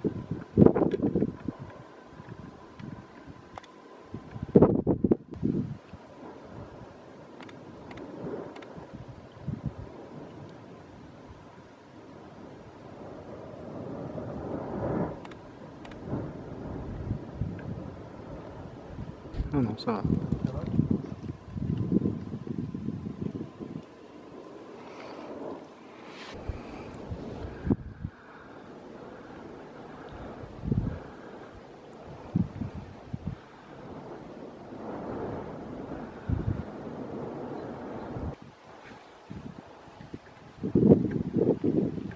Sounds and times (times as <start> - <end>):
Eruption: 0.0 - 42.1.